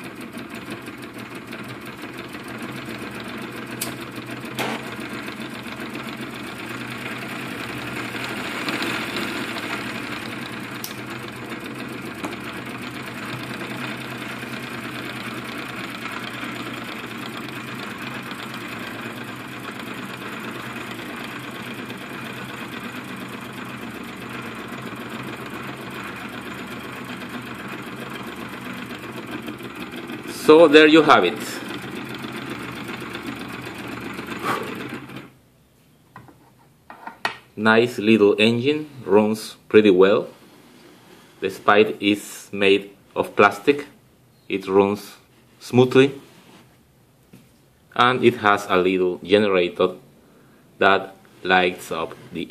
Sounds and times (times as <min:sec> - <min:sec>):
Engine: 0:00.0 - 0:35.6
Speech: 0:30.3 - 0:31.6, 0:37.6 - 0:40.3, 0:41.4 - 0:46.2, 0:48.0 - 0:50.0, 0:50.8 - 0:52.5.